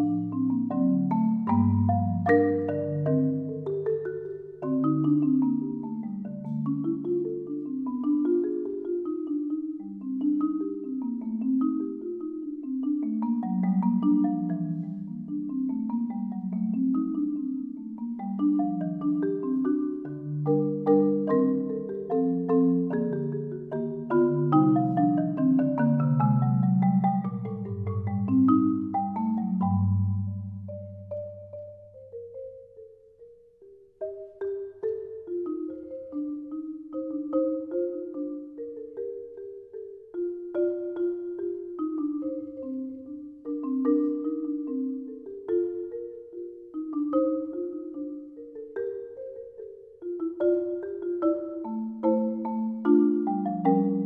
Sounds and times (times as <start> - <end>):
Glockenspiel: 0.0 - 54.0
Marimba, xylophone: 0.0 - 54.0.